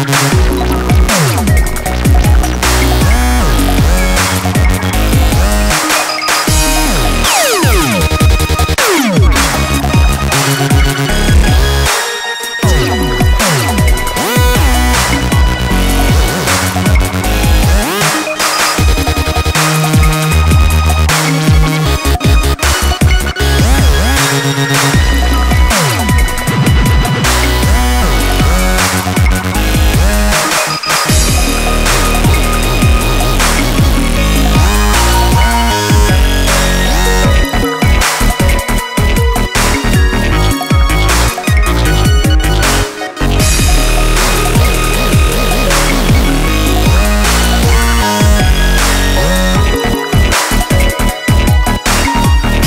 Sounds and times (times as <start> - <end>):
Dubstep: 0.0 - 52.6.